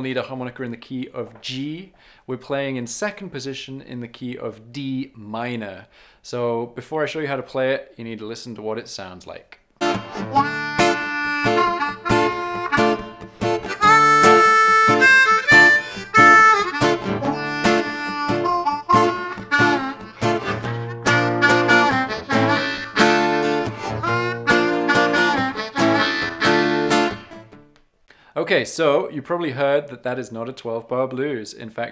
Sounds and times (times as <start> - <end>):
Speech: 0.0 - 9.6, 28.4 - 31.9
Music: 9.8 - 27.8.